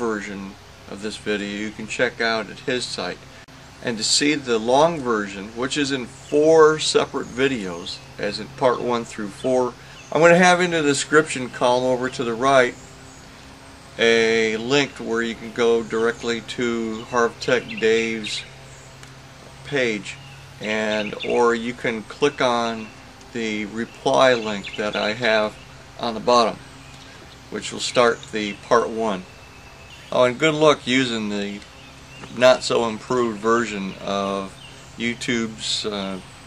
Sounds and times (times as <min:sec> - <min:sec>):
Speech: 0:00.0 - 0:03.2, 0:03.8 - 0:12.8, 0:14.0 - 0:18.5, 0:19.6 - 0:26.6, 0:27.5 - 0:29.3, 0:30.1 - 0:31.6, 0:32.2 - 0:36.3.